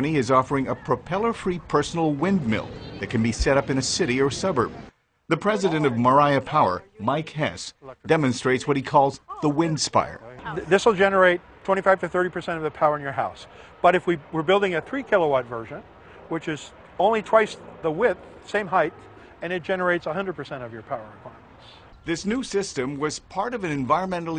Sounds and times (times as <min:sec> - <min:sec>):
Speech: 0:00.0 - 0:04.7, 0:05.3 - 0:21.4, 0:22.1 - 0:24.3.